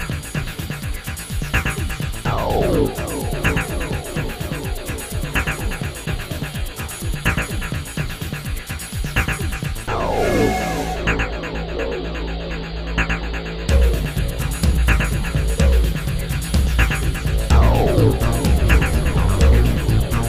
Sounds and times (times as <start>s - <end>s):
Music: 0.0s - 20.2s.